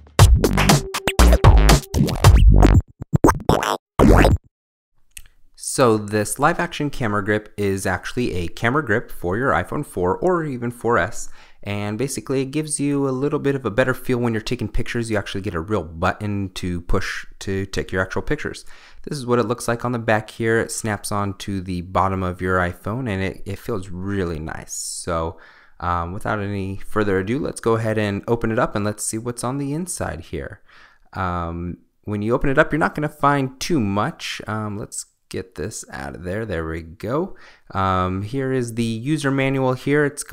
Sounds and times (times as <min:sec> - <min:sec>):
Speech: 0:05.6 - 0:30.6, 0:31.2 - 0:40.3.